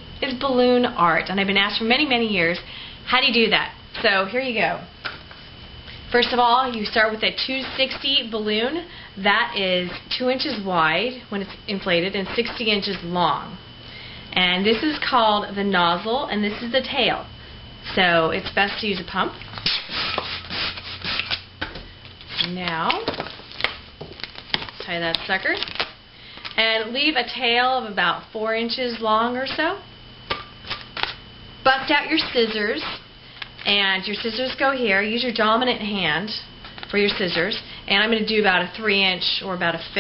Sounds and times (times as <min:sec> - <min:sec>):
Speech: 0:00.2 - 0:04.9, 0:06.2 - 0:13.6, 0:14.4 - 0:17.3, 0:17.9 - 0:19.4, 0:22.4 - 0:23.2, 0:24.8 - 0:25.7, 0:26.6 - 0:29.9, 0:31.7 - 0:33.0, 0:33.7 - 0:40.0.